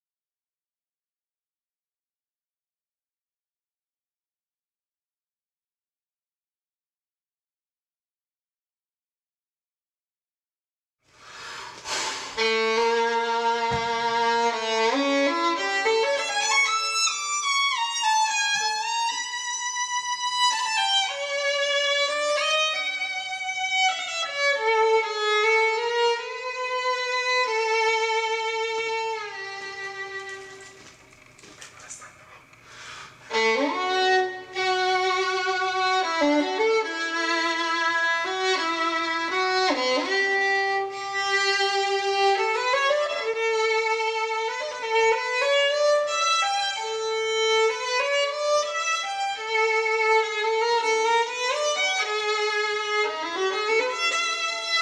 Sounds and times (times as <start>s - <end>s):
Violin, fiddle: 11.8s - 30.8s, 33.3s - 54.8s.